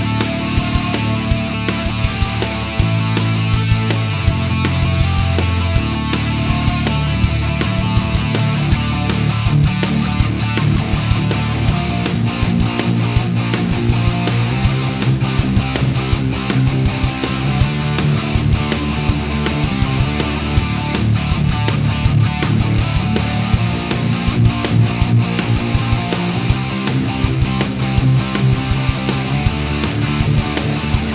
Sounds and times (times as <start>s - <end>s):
Music: 0.0s - 31.1s.